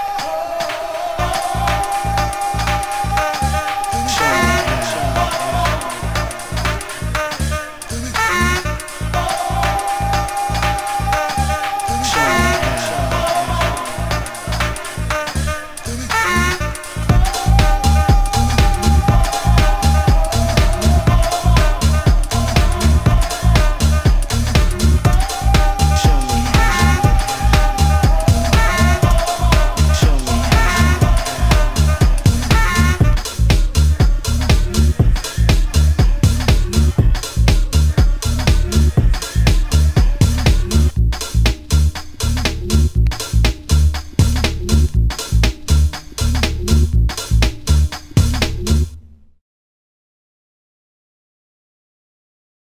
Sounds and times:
Funk: 1.2 - 48.9.

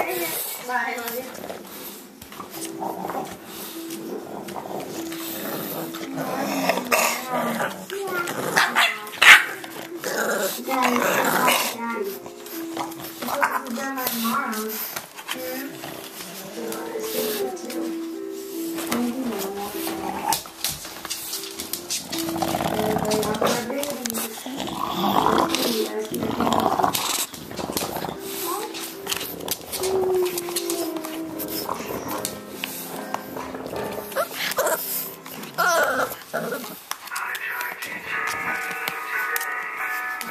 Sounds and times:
Speech: 0.0 - 1.4, 10.6 - 12.2, 13.2 - 14.8, 15.4 - 15.8, 16.4 - 18.0, 19.0 - 20.0, 22.8 - 26.5, 37.1 - 40.3
Music: 0.0 - 40.3.

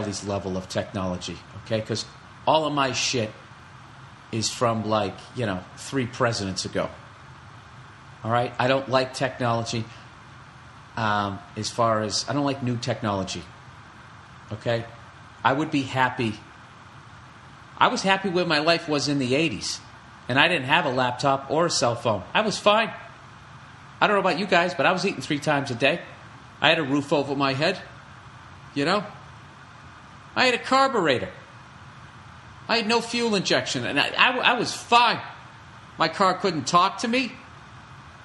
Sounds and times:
Speech: 0.0 - 3.4, 4.3 - 7.0, 8.2 - 10.0, 11.0 - 13.5, 14.5 - 16.5, 17.8 - 23.1, 24.0 - 28.0, 28.8 - 29.2, 30.4 - 31.5, 32.7 - 35.4, 36.0 - 37.5.

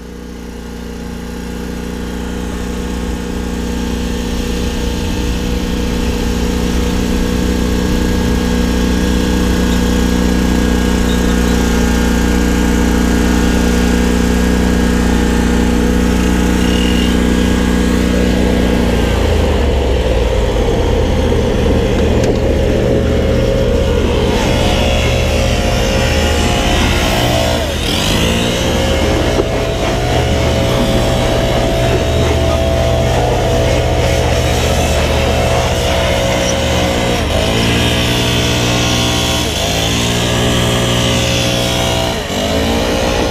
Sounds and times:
Lawn mower: 0.0 - 43.3.

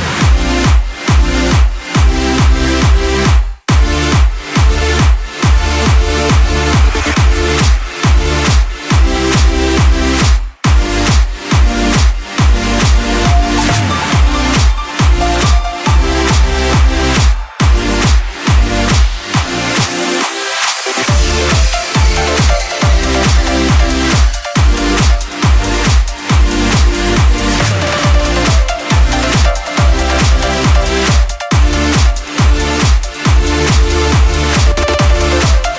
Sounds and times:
Electronic dance music: 0.0 - 35.7.

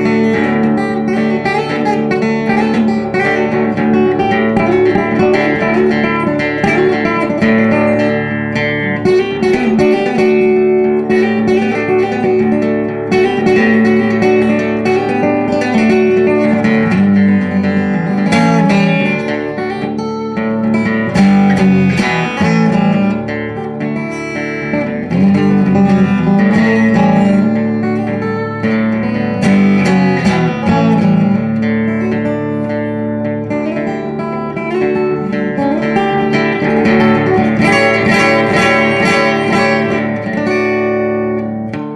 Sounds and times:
Music: 0.0 - 41.9.

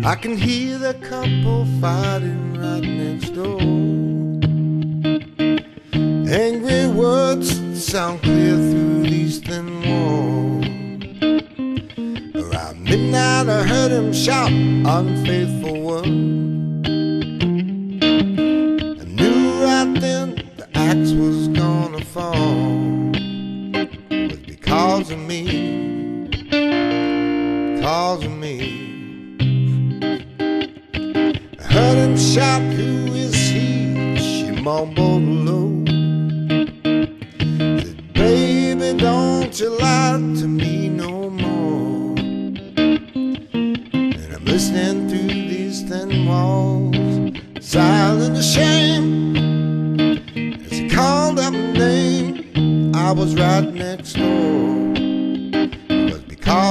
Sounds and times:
Electric guitar: 0.0 - 56.7.

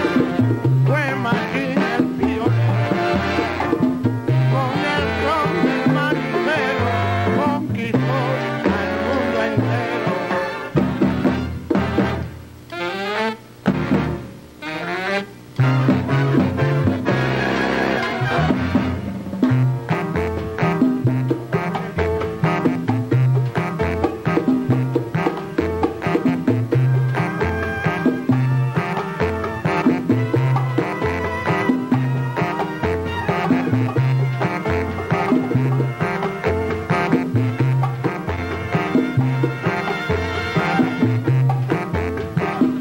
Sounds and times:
Salsa music: 0.0 - 42.8.

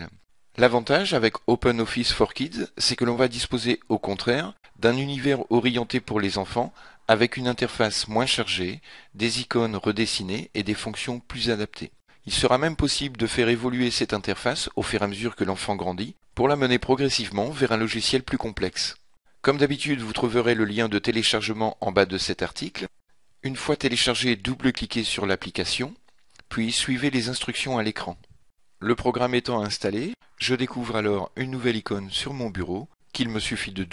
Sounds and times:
Speech: 0.0 - 33.9.

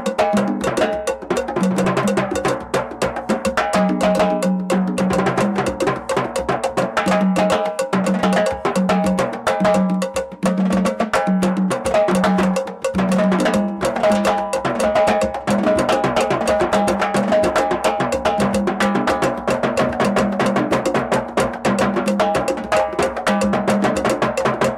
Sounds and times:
Drum: 0.0 - 24.7.

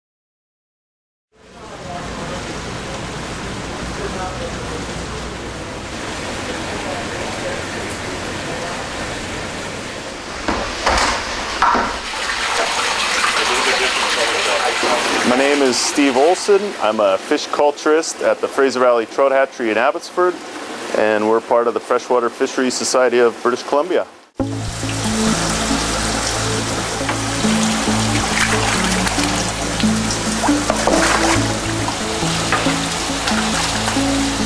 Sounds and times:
Speech: 1.4 - 5.8, 6.5 - 8.9, 13.4 - 24.1
Liquid: 10.3 - 17.4, 24.6 - 34.4.

